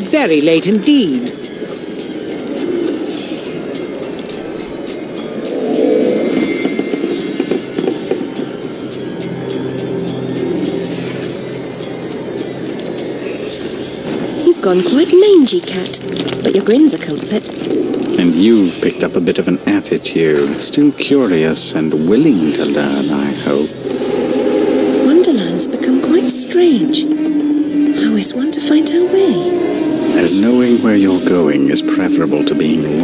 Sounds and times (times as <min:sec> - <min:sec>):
Speech: 0:00.0 - 0:01.3, 0:18.2 - 0:23.8, 0:30.2 - 0:33.0
Music: 0:00.0 - 0:33.0.